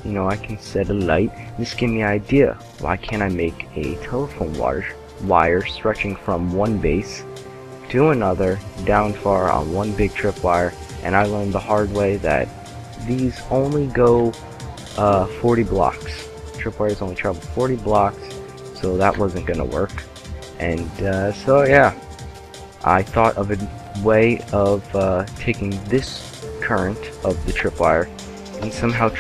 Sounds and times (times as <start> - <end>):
Speech: 0.0 - 7.2, 7.9 - 14.4, 15.0 - 22.0, 22.8 - 29.2
Music: 0.0 - 29.2.